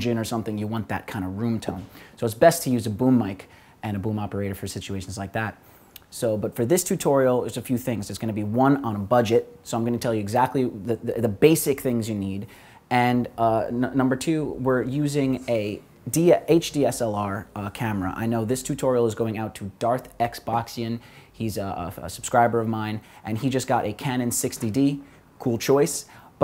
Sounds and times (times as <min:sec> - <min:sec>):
Speech: 0:00.0 - 0:26.4.